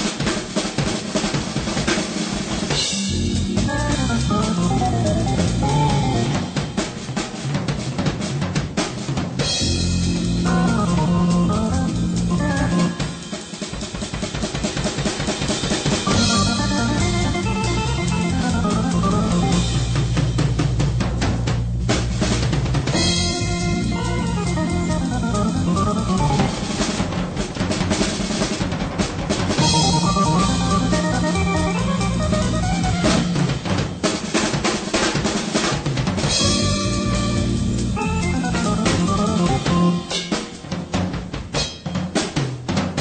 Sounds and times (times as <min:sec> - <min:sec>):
Drum kit: 0:00.0 - 0:43.0
Drum roll: 0:00.0 - 0:43.0
Bass drum: 0:02.7 - 0:13.2, 0:14.1 - 0:34.0, 0:36.0 - 0:40.0.